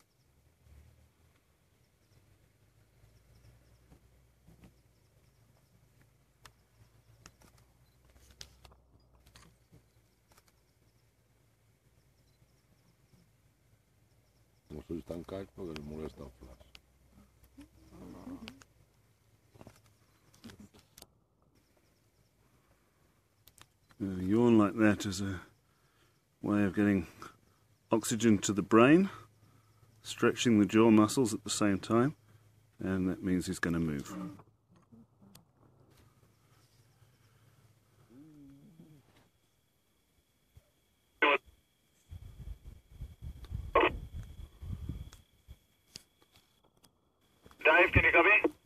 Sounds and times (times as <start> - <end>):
Speech: 14.7 - 16.7, 24.0 - 25.5, 26.4 - 27.1, 27.9 - 29.2, 30.0 - 32.2, 32.8 - 34.4, 47.6 - 48.6.